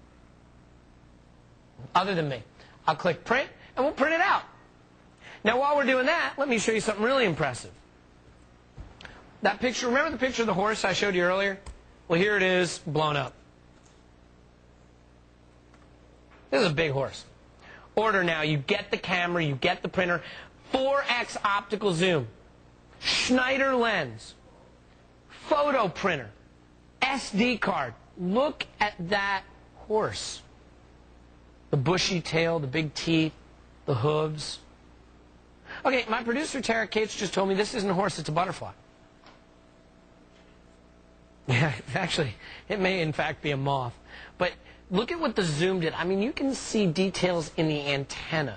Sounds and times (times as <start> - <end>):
Speech: 1.8 - 4.6, 5.4 - 7.8, 9.4 - 13.4, 16.5 - 17.4, 18.0 - 22.4, 23.0 - 24.4, 25.3 - 26.4, 27.0 - 30.5, 31.7 - 34.7, 35.8 - 38.8, 41.5 - 48.5.